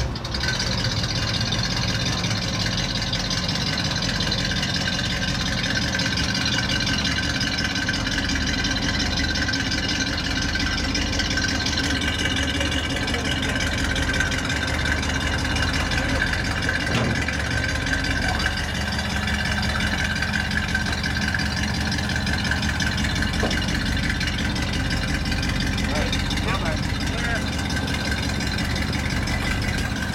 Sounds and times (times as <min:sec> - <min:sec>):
Car: 0:00.0 - 0:30.1
Speech: 0:12.6 - 0:13.8, 0:18.2 - 0:18.6, 0:25.8 - 0:28.1.